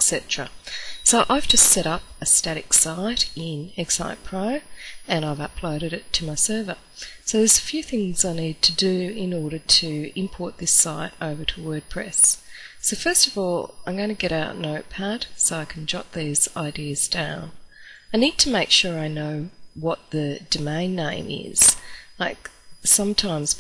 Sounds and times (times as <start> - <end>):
Speech: 0.0 - 23.6.